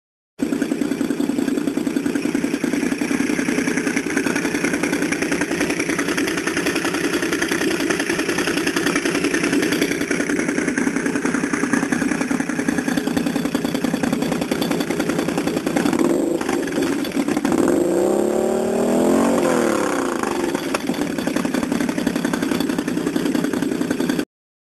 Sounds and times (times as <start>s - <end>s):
Rattle: 0.4s - 24.3s.